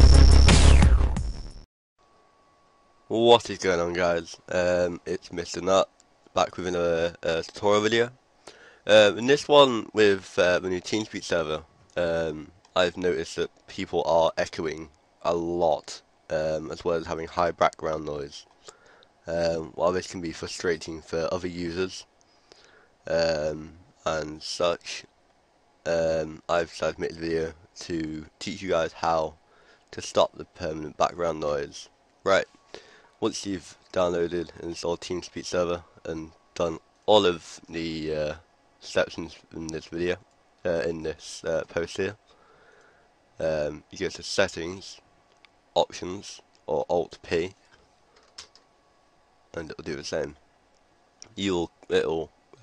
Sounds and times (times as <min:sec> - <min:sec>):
Speech: 0:03.1 - 0:08.2, 0:08.8 - 0:18.5, 0:19.3 - 0:22.1, 0:23.1 - 0:25.1, 0:25.9 - 0:32.5, 0:33.2 - 0:42.2, 0:43.4 - 0:45.0, 0:45.8 - 0:47.6, 0:49.5 - 0:50.4, 0:51.2 - 0:52.6.